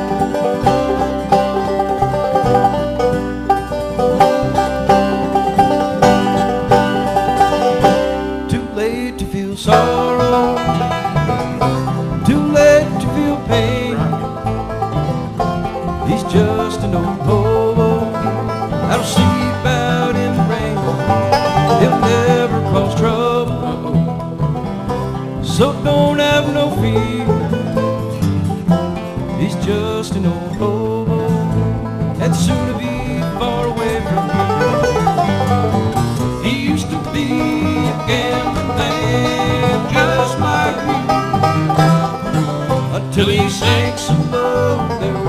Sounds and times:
Music: 0.0 - 45.2.

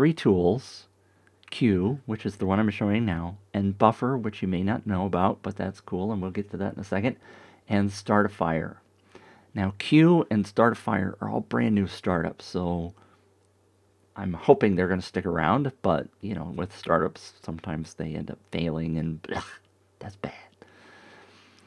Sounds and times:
Speech: 0.0 - 8.8, 9.5 - 13.0, 14.2 - 20.5.

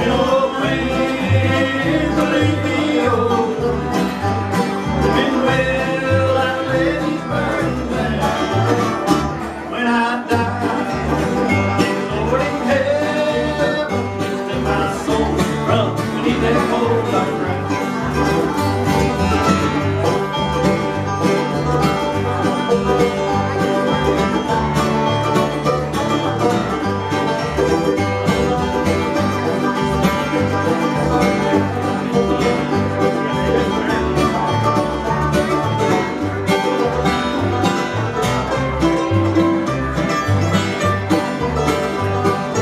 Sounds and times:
Bluegrass: 0.0 - 42.6
Flamenco: 0.0 - 42.6.

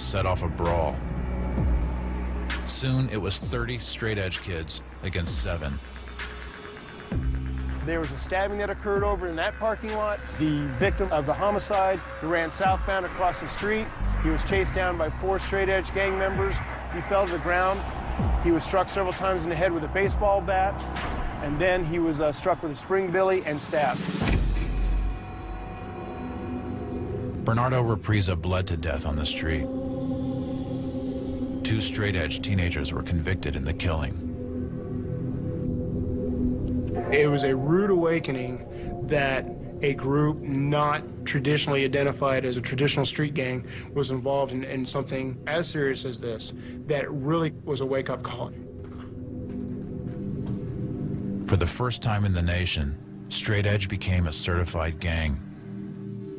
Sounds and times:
Speech: 0.0 - 1.0, 2.7 - 5.8, 7.8 - 17.8, 18.5 - 20.8, 21.4 - 24.1, 27.4 - 29.7, 31.6 - 34.2, 37.1 - 48.6, 51.4 - 55.5
Music: 0.0 - 56.3.

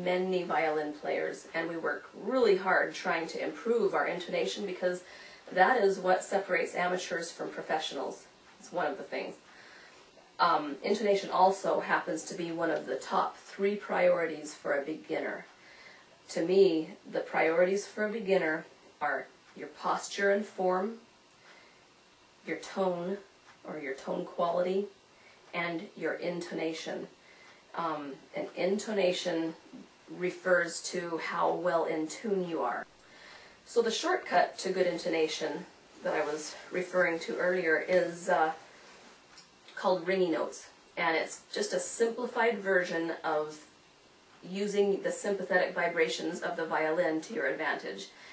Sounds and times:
Speech: 0.0 - 9.4, 10.4 - 15.5, 16.3 - 21.1, 22.4 - 27.2, 27.8 - 32.9, 33.7 - 38.6, 39.7 - 43.7, 44.4 - 48.2.

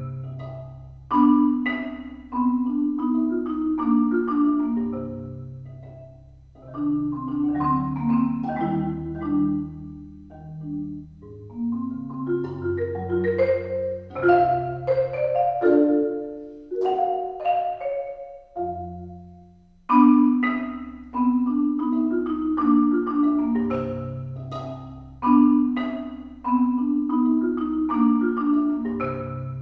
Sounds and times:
Marimba, xylophone: 0.0 - 29.6.

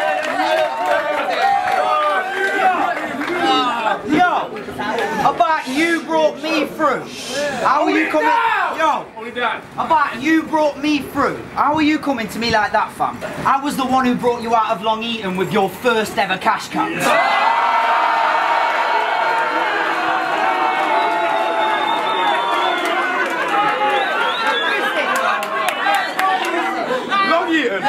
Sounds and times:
Inside, public space: 0.0 - 27.8
Speech: 2.8 - 17.1.

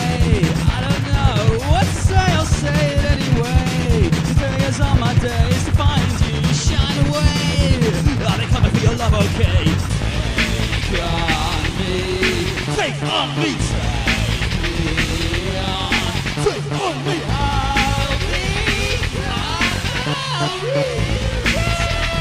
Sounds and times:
Techno: 0.0 - 22.2.

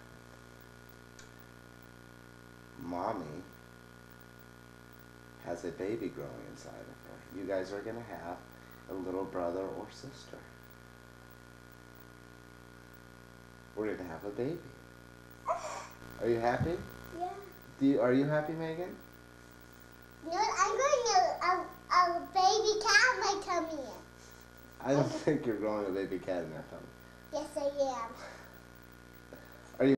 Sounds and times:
Speech: 5.4 - 10.5, 13.8 - 14.7, 24.8 - 28.1.

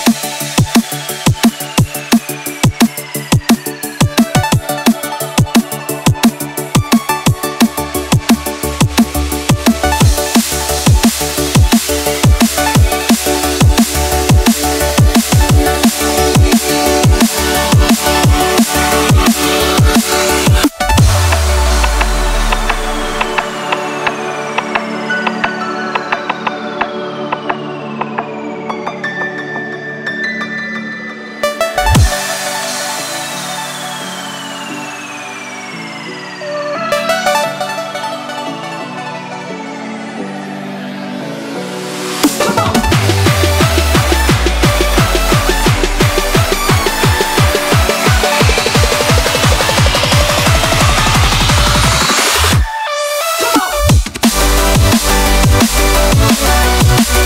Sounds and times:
Music: 0.0 - 57.2.

